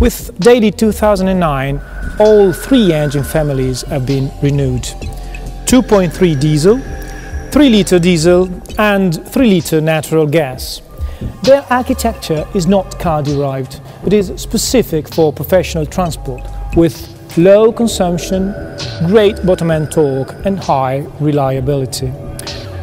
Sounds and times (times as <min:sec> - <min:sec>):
Speech: 0:00.0 - 0:05.0, 0:05.7 - 0:06.9, 0:07.6 - 0:22.2
Music: 0:00.0 - 0:22.8.